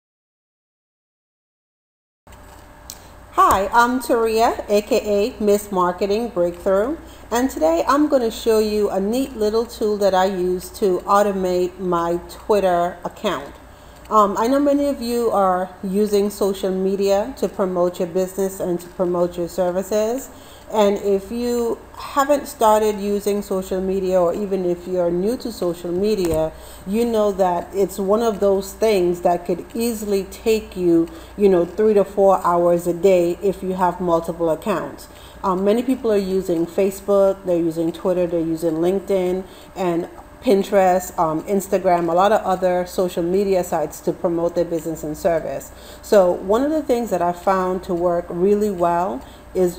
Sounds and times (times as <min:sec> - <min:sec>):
Speech: 0:03.4 - 0:49.7.